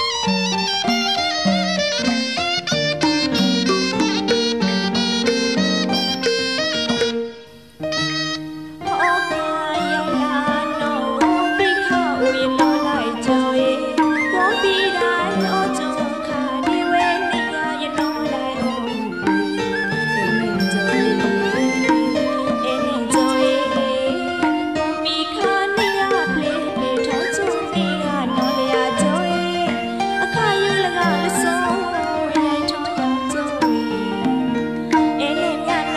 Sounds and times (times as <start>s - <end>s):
Music: 0.0s - 35.9s.